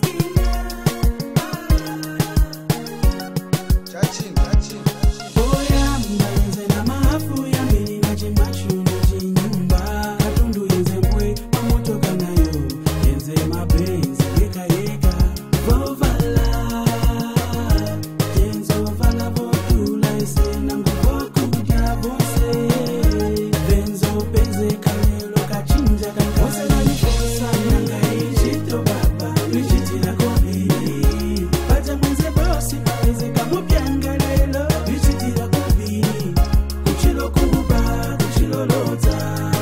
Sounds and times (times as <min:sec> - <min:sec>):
Rapping: 0:00.0 - 0:02.5, 0:03.9 - 0:39.6
Afrobeat: 0:00.0 - 0:39.6
Hip hop music: 0:00.0 - 0:39.6.